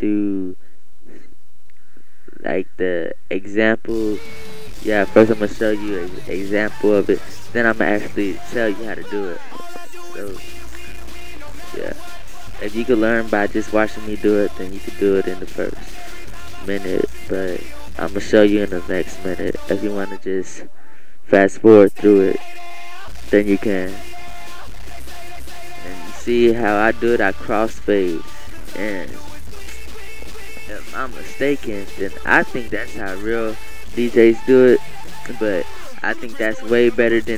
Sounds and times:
Speech: 0.0s - 0.6s, 2.4s - 9.5s, 10.1s - 10.4s, 11.6s - 12.0s, 12.6s - 15.9s, 16.6s - 20.7s, 21.3s - 22.4s, 23.3s - 24.0s, 25.9s - 29.2s, 30.6s - 37.3s
Music: 3.9s - 20.2s, 21.9s - 37.3s.

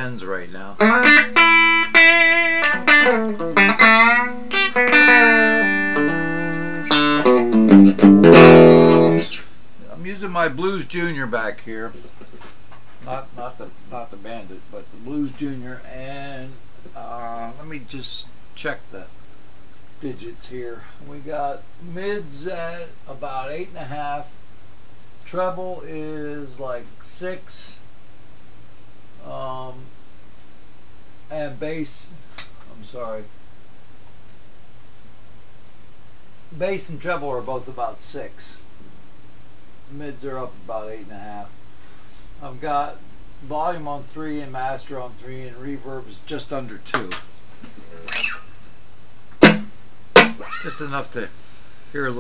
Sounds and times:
Speech: 0.0s - 0.8s, 9.8s - 12.1s, 13.0s - 19.2s, 20.0s - 24.4s, 25.2s - 27.9s, 29.2s - 30.0s, 31.3s - 33.4s, 36.5s - 38.7s, 39.9s - 41.6s, 42.4s - 48.2s, 50.6s - 52.2s
Bass guitar: 0.8s - 9.5s, 49.4s - 50.8s
Electric guitar: 0.8s - 9.5s, 49.4s - 50.8s
Strum: 0.8s - 9.5s, 49.4s - 50.6s.

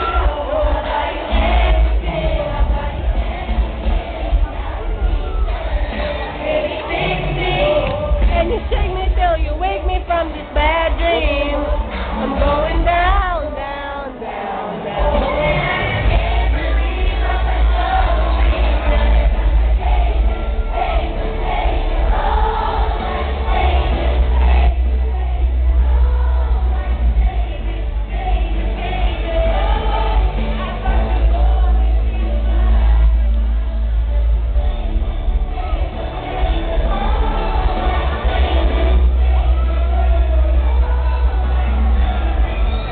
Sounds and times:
Female singing: 0.0s - 42.9s
Music: 0.0s - 42.9s.

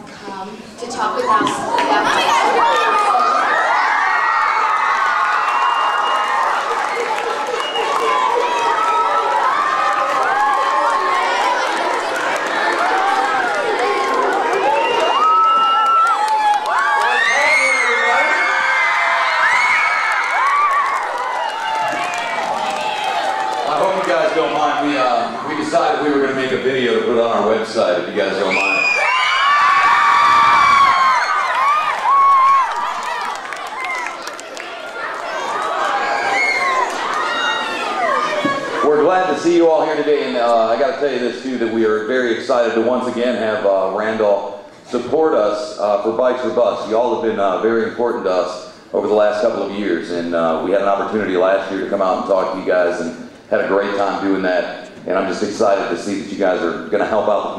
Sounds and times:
Speech: 23.7s - 28.8s, 38.4s - 57.5s.

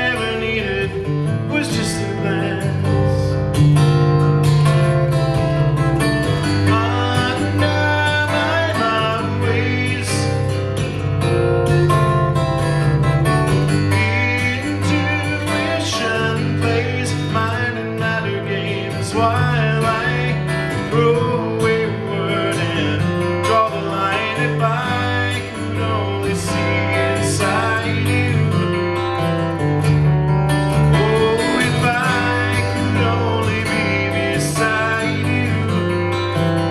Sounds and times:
Acoustic guitar: 0.0s - 36.7s.

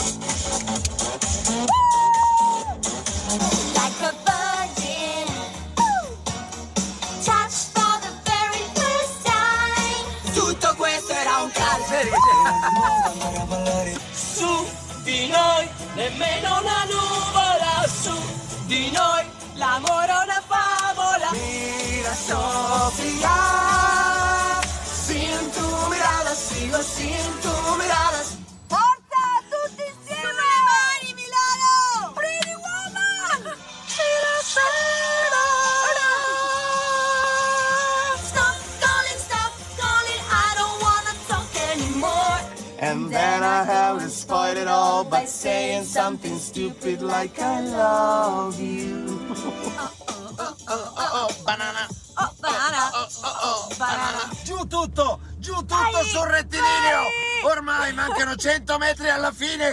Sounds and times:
Music: 0.0s - 59.7s
Male singing: 10.2s - 28.4s, 34.0s - 38.5s, 41.6s - 54.5s.

